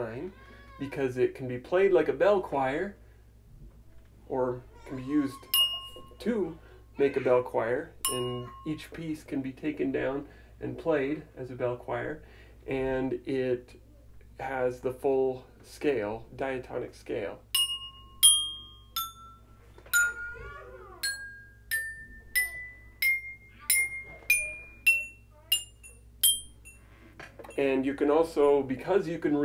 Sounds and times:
Wind chime: 5.5s - 6.4s, 8.0s - 8.8s, 17.6s - 27.7s.

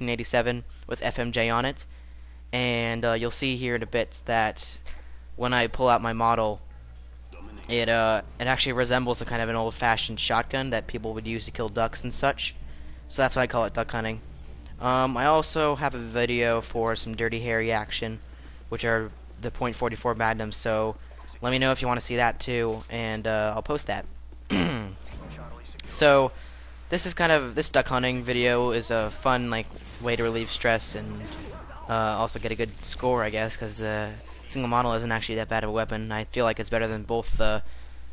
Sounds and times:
Speech: 0.0s - 1.9s, 2.6s - 4.8s, 5.4s - 6.6s, 7.3s - 14.2s, 14.8s - 24.1s, 24.7s - 37.6s.

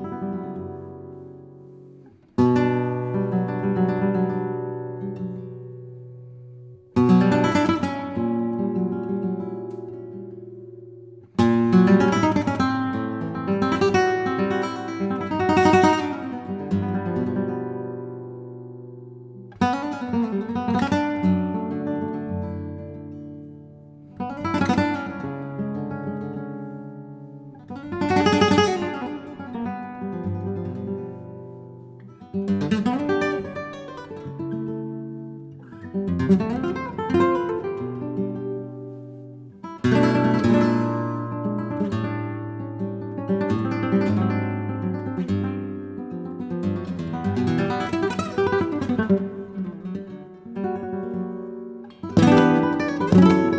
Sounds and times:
Acoustic guitar: 0.0s - 53.5s.

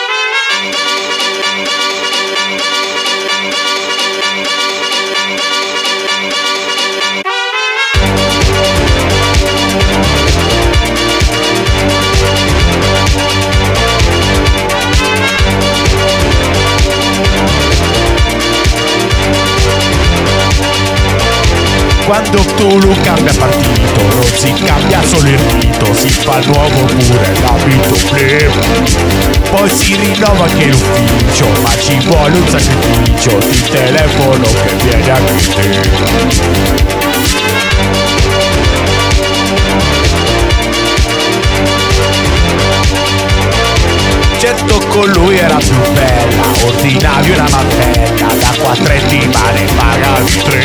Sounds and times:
Music: 0.0s - 50.6s.

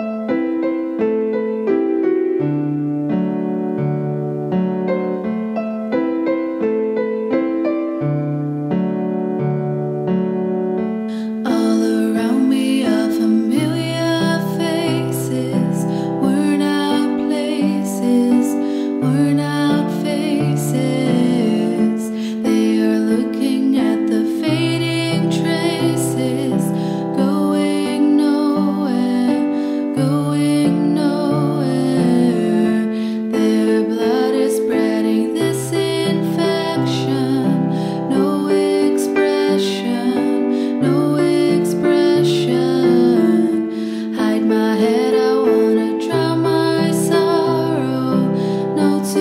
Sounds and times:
Music: 0.0s - 49.2s.

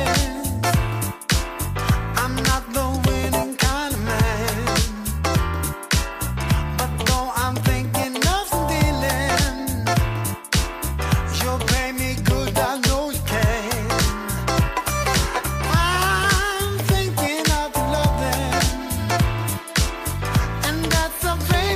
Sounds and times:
Funk: 0.0s - 21.7s.

